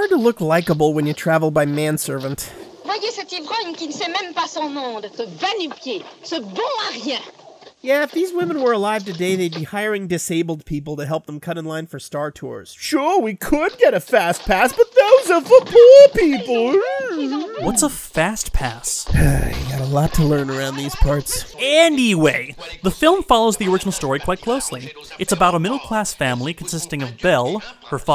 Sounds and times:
Speech: 0.0 - 7.2, 7.9 - 28.1.

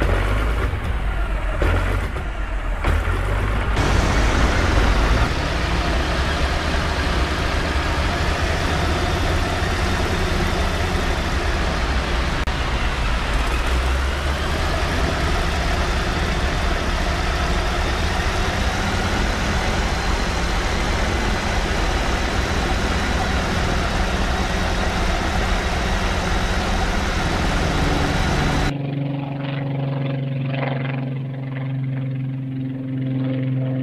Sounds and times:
Aircraft engine: 0.0 - 33.8
Engine: 0.0 - 33.8
Outside, urban or manmade: 0.0 - 33.8.

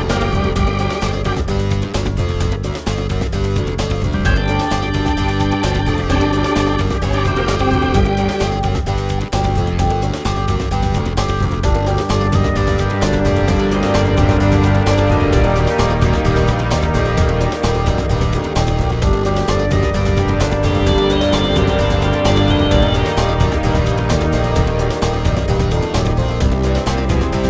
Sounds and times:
Music: 0.0 - 27.5.

